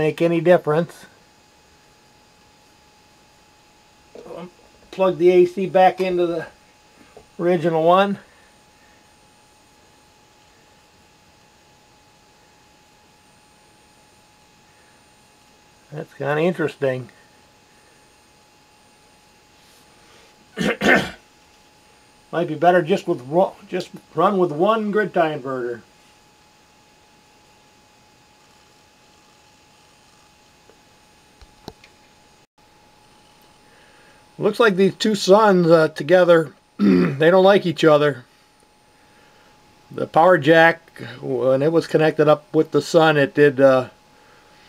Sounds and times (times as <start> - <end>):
Speech: 0.0 - 1.2, 4.2 - 6.6, 7.4 - 8.2, 15.9 - 17.2, 22.3 - 25.9, 34.4 - 38.3, 39.9 - 44.0.